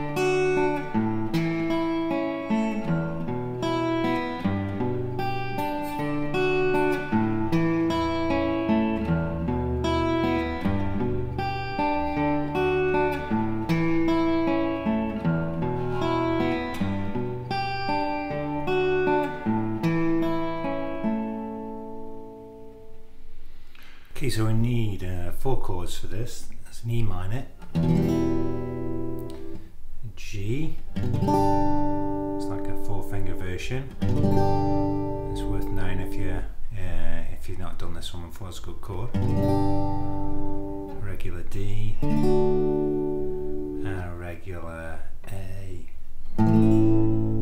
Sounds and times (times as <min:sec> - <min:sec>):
Strum: 0:00.0 - 0:26.6, 0:27.6 - 0:47.4
Acoustic guitar: 0:00.0 - 0:47.4
Speech: 0:24.2 - 0:27.6, 0:30.0 - 0:30.8, 0:32.4 - 0:34.0, 0:35.3 - 0:39.2, 0:40.9 - 0:42.0, 0:43.8 - 0:46.0.